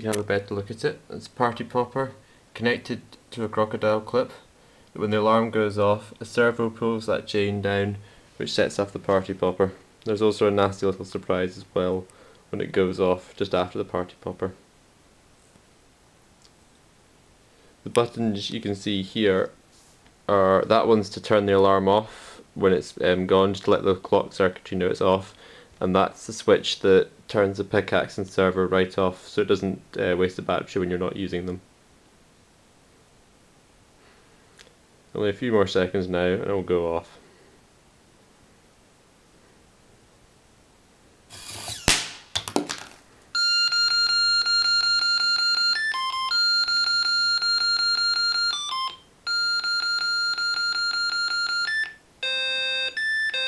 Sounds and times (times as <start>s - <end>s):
Speech: 0.0s - 14.6s, 17.8s - 19.6s, 20.3s - 31.7s, 35.1s - 37.2s.